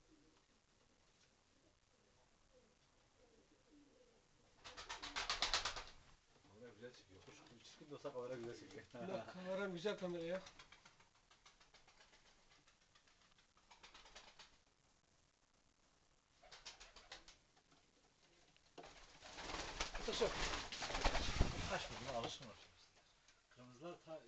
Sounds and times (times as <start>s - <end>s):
Inside, small room: 0.0s - 24.2s
Speech: 6.5s - 10.5s, 20.0s - 20.5s, 21.6s - 22.8s, 23.5s - 24.2s.